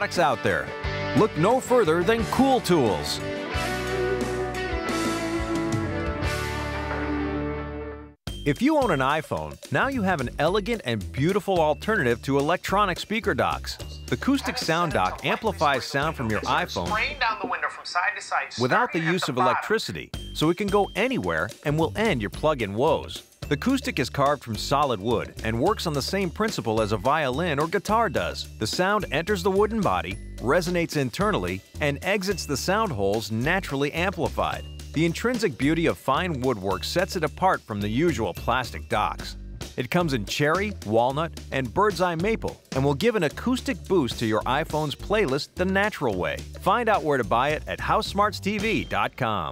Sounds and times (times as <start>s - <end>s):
Speech: 0.0s - 3.2s, 8.5s - 49.5s
Music: 0.0s - 49.5s.